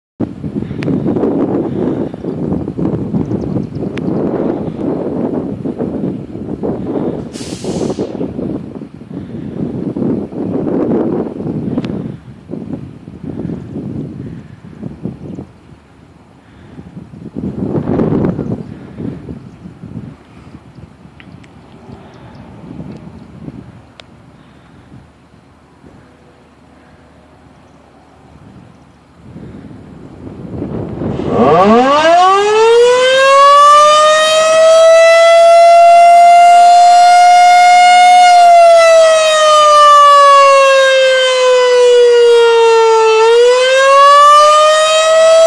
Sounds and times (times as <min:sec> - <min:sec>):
Civil defense siren: 0:30.4 - 0:45.4.